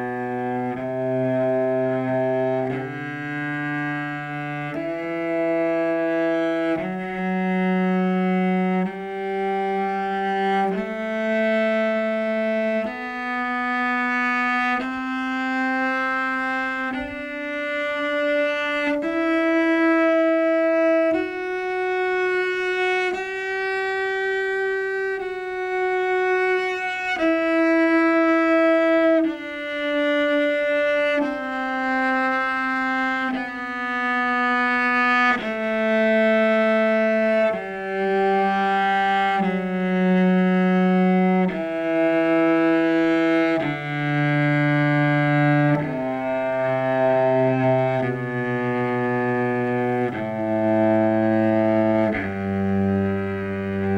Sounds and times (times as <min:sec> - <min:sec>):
Cello: 0:00.0 - 0:53.9.